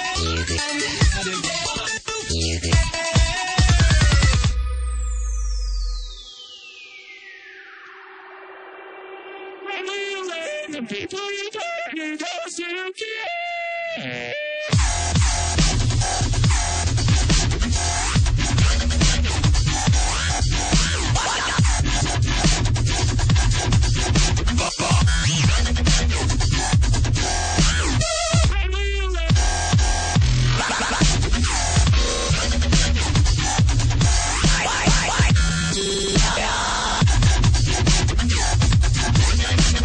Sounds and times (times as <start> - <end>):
Music: 0.0 - 39.8.